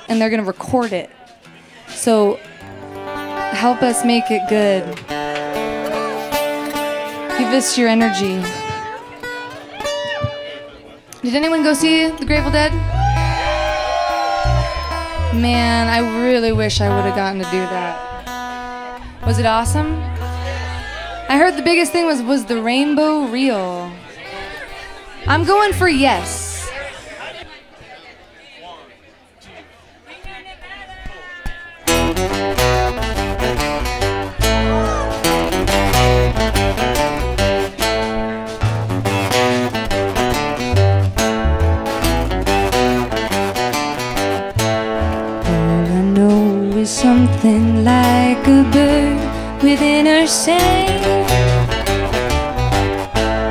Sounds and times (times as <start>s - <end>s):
Music: 0.1s - 26.7s, 31.8s - 53.5s.